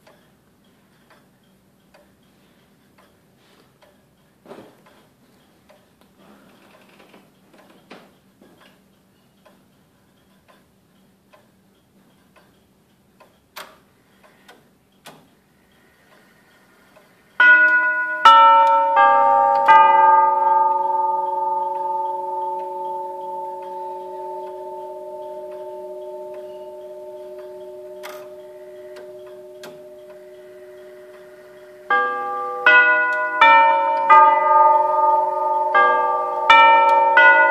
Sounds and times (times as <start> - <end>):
Tick-tock: 0.0 - 6.8, 7.6 - 18.8, 20.6 - 34.3
Tick: 10.2 - 10.7, 11.3 - 12.6, 26.3 - 30.2.